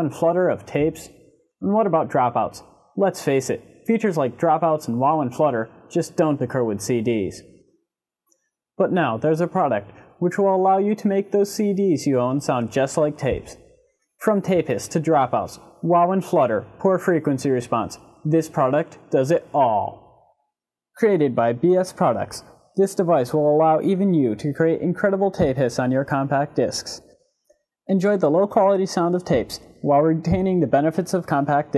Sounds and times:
Speech: 0:00.0 - 0:07.5, 0:08.8 - 0:13.6, 0:14.2 - 0:20.2, 0:21.0 - 0:27.1, 0:27.9 - 0:31.7.

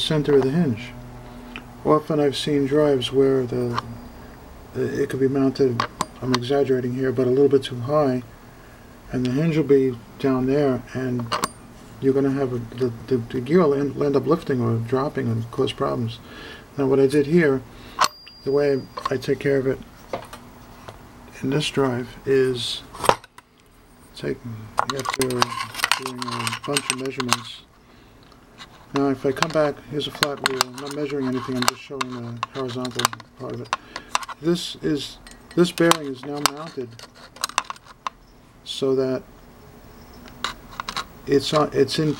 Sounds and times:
Speech: 0:00.0 - 0:01.0, 0:01.8 - 0:04.0, 0:04.8 - 0:08.3, 0:09.1 - 0:11.4, 0:12.0 - 0:16.2, 0:16.8 - 0:17.7, 0:18.4 - 0:19.8, 0:21.3 - 0:22.9, 0:24.2 - 0:27.7, 0:28.9 - 0:33.7, 0:34.4 - 0:37.0, 0:38.7 - 0:39.3, 0:41.3 - 0:42.1.

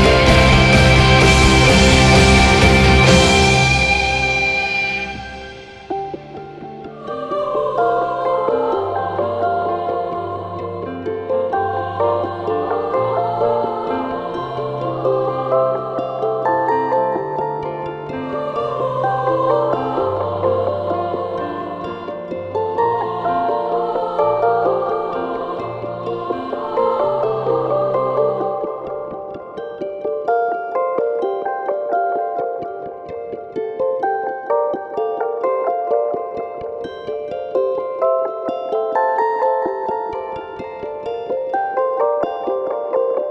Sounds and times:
New-age music: 0:00.0 - 0:43.3.

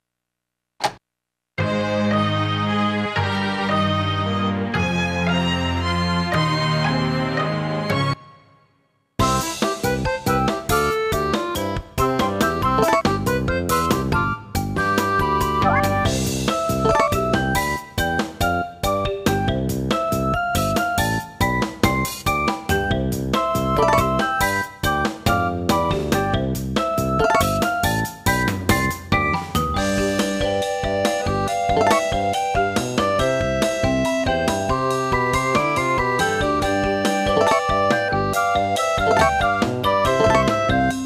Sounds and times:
Music: 0:01.6 - 0:41.0.

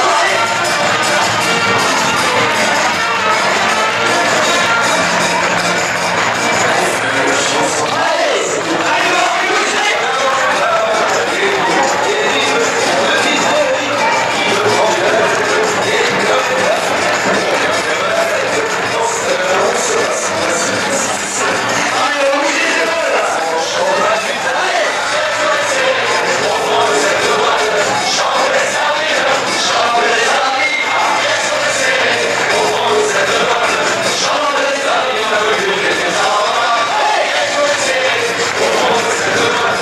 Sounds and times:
Music: 0:00.0 - 0:39.8.

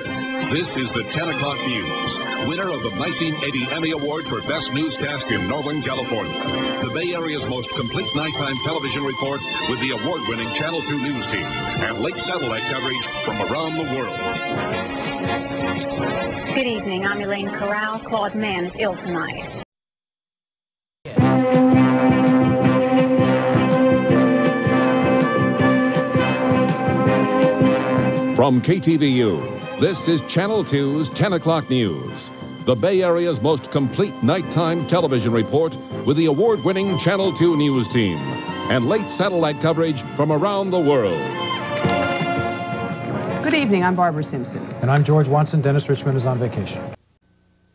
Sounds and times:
Music: 0:00.0 - 0:19.6, 0:21.1 - 0:47.0
Speech: 0:00.5 - 0:14.8, 0:16.6 - 0:19.6, 0:28.4 - 0:41.3, 0:43.4 - 0:47.0.

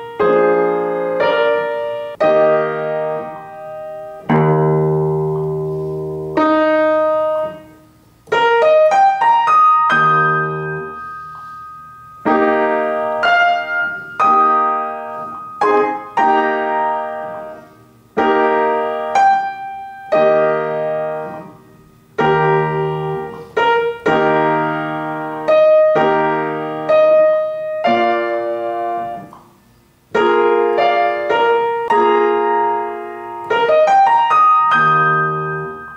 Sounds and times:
Inside, small room: 0:00.0 - 0:35.9
Piano: 0:00.0 - 0:35.9
Electronic tuner: 0:02.0 - 0:23.4.

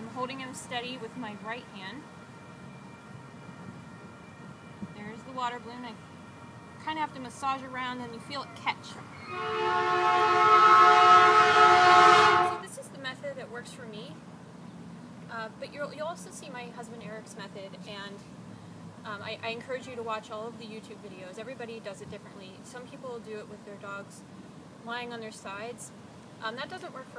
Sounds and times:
Outside, urban or manmade: 0:00.0 - 0:27.1
Speech: 0:05.0 - 0:06.0, 0:06.8 - 0:09.0, 0:12.6 - 0:14.2, 0:15.3 - 0:18.2, 0:19.1 - 0:24.2, 0:24.8 - 0:27.1
Train whistle: 0:09.1 - 0:12.7.

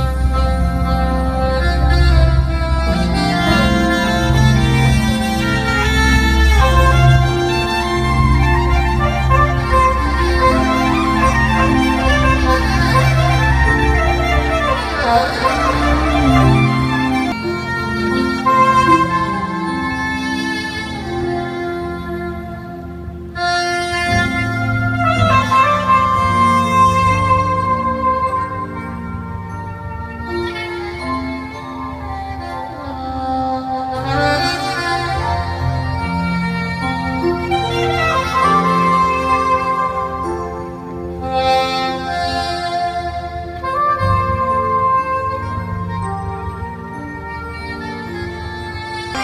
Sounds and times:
Jazz: 0:00.0 - 0:49.2.

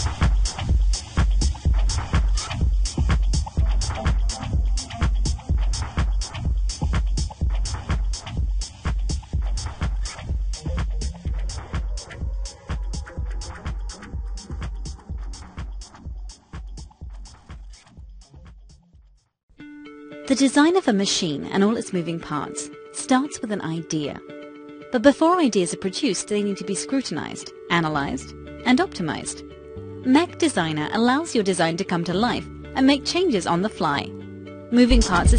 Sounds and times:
Music: 0:00.0 - 0:35.3.

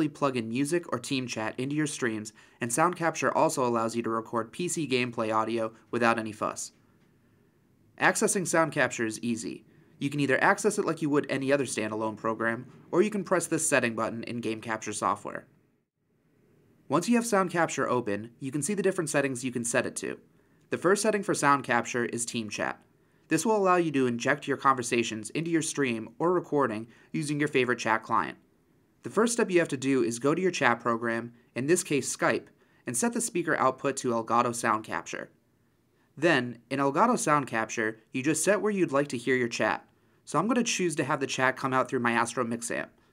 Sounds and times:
Speech: 0:00.0 - 0:06.8, 0:08.0 - 0:15.5, 0:16.9 - 0:28.4, 0:29.0 - 0:35.4, 0:36.2 - 0:43.0.

